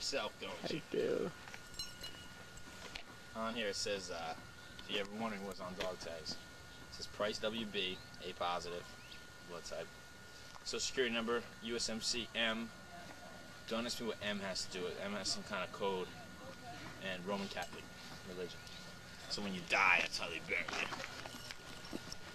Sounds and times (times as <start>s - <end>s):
Speech: 0.0s - 1.3s, 3.4s - 6.4s, 7.0s - 8.8s, 9.5s - 9.9s, 10.6s - 12.7s, 13.7s - 16.2s, 17.0s - 18.6s, 19.3s - 21.0s.